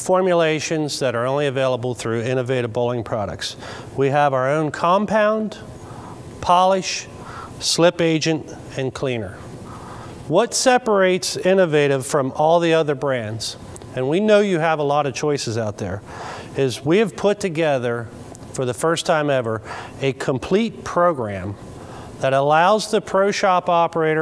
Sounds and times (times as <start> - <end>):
Speech: 0.0 - 5.7, 6.4 - 9.4, 10.3 - 16.0, 16.6 - 21.6, 22.2 - 24.2.